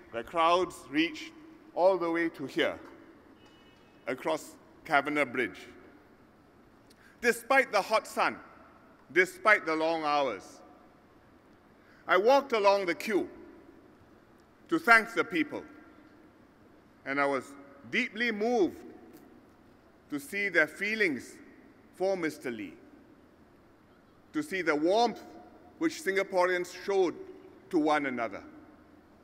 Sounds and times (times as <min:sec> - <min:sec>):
Narration, monologue: 0:00.0 - 0:29.2
Male speech, man speaking: 0:00.1 - 0:02.8, 0:04.1 - 0:05.8, 0:07.2 - 0:08.4, 0:09.1 - 0:10.6, 0:12.1 - 0:13.3, 0:14.7 - 0:15.7, 0:17.1 - 0:18.8, 0:20.1 - 0:21.4, 0:22.0 - 0:22.8, 0:24.3 - 0:28.5.